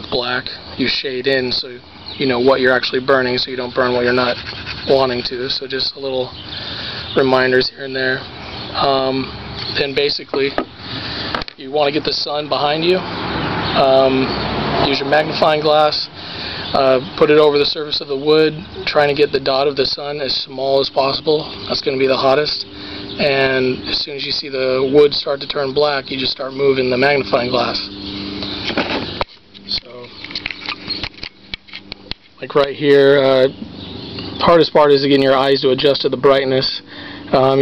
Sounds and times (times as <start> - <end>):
Speech: 0.0 - 6.4, 7.2 - 8.2, 8.8 - 10.6, 11.6 - 13.0, 13.8 - 16.1, 16.7 - 27.9, 29.7 - 30.1, 32.4 - 33.6, 34.4 - 37.6.